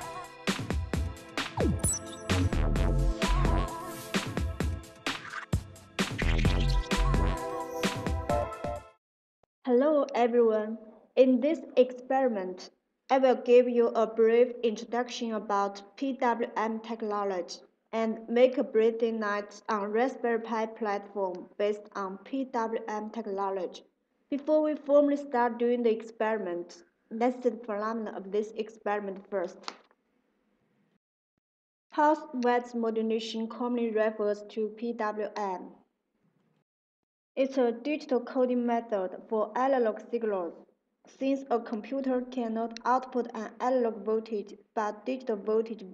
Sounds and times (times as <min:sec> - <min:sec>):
Speech: 0:09.7 - 0:29.7, 0:32.0 - 0:35.8, 0:37.4 - 0:45.9.